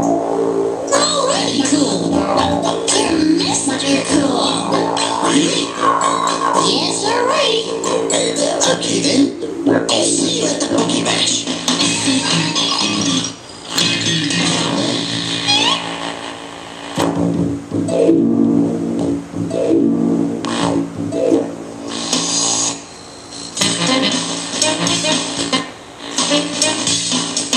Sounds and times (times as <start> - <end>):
Techno: 0.0 - 15.9, 17.0 - 22.8
Inside, small room: 0.0 - 27.5.